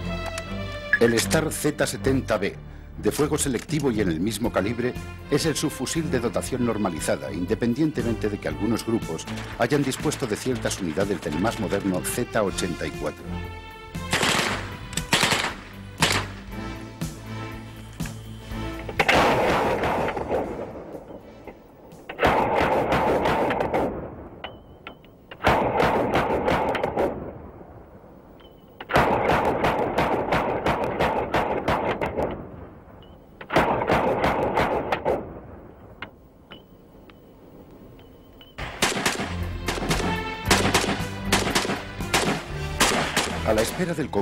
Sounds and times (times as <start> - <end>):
Music: 0.0 - 22.2, 38.2 - 44.2
Speech: 1.0 - 13.3, 43.4 - 44.2
Machine gun: 14.1 - 16.3, 38.6 - 43.4.